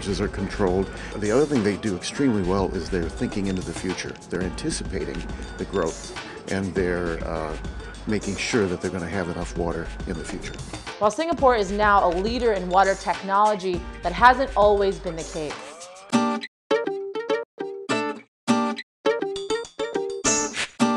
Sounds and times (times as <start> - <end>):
Speech: 0.0 - 15.6
Music: 0.0 - 20.9.